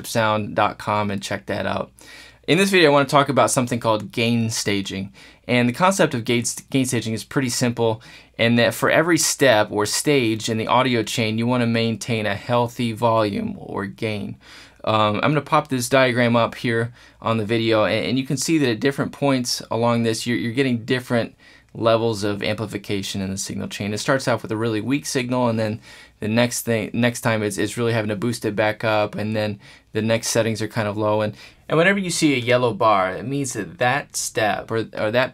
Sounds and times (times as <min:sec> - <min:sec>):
Speech: 0:00.0 - 0:35.3.